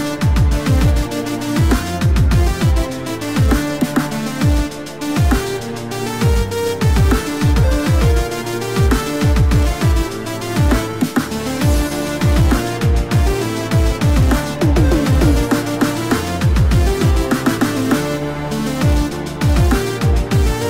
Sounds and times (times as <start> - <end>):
Dubstep: 14.3 - 16.2.